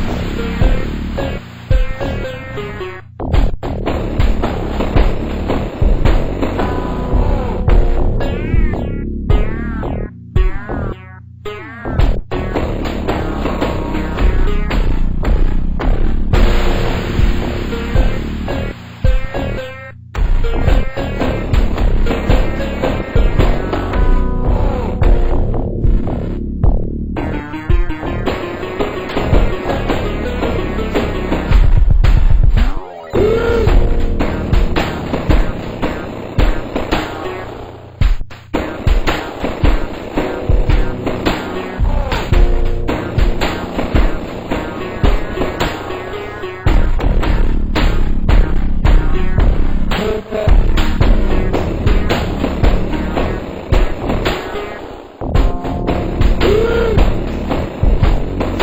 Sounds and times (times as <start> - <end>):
Theme music: 0.0 - 31.9, 32.6 - 38.0, 38.6 - 58.6.